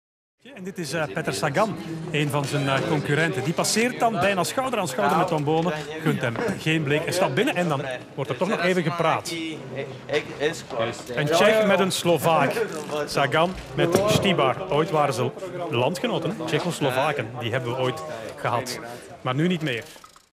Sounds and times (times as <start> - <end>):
Speech: 0.4 - 19.9.